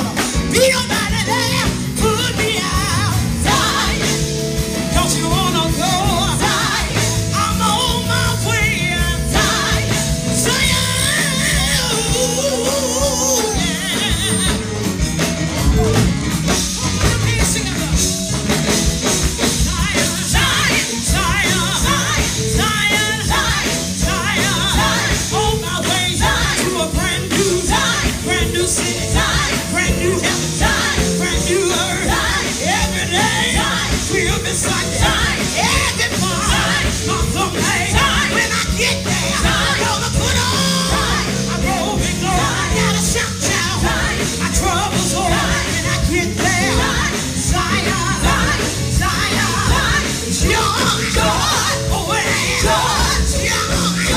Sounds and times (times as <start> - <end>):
Choir: 0.0 - 14.7, 19.4 - 54.1
Female singing: 0.5 - 4.2, 5.0 - 14.6, 19.6 - 54.1.